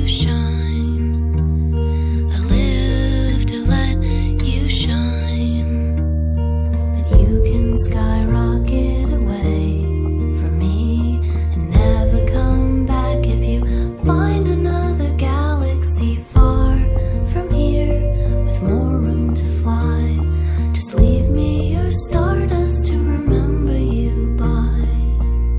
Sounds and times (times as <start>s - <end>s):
Rhythm and blues: 6.5s - 25.5s.